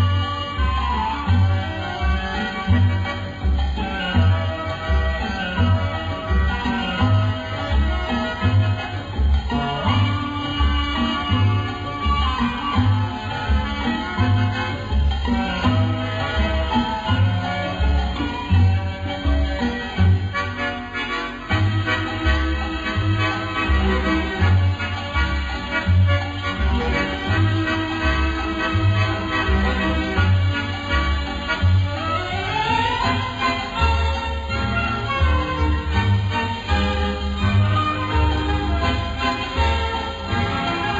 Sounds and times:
Music: 0.0 - 40.9.

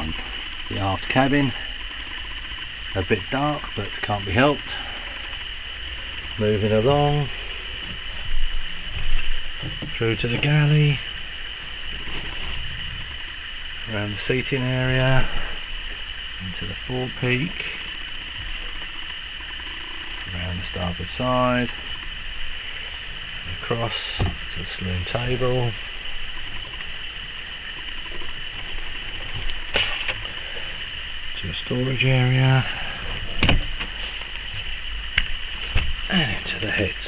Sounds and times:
Speech: 0.0 - 1.6, 3.0 - 4.7, 6.4 - 7.3, 10.0 - 11.0, 13.9 - 15.3, 16.4 - 17.6, 20.3 - 21.7, 23.5 - 25.8, 31.4 - 32.7, 36.1 - 37.0.

